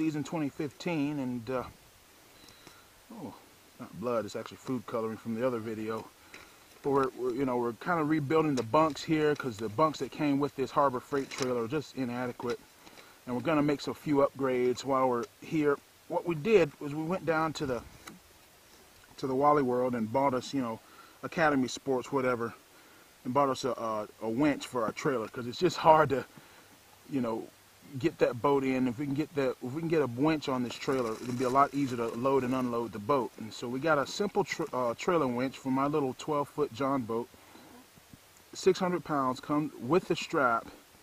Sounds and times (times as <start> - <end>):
Speech: 0.0 - 1.8, 3.1 - 6.1, 6.8 - 12.6, 13.2 - 17.9, 19.2 - 22.6, 23.2 - 26.3, 27.1 - 37.3, 38.6 - 40.8.